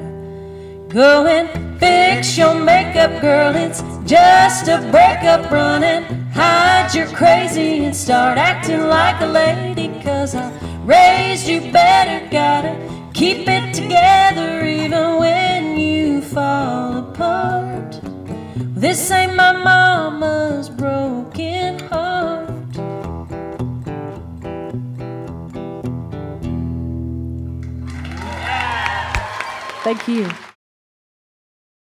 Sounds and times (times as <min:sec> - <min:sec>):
Singing: 0:01.0 - 0:17.8.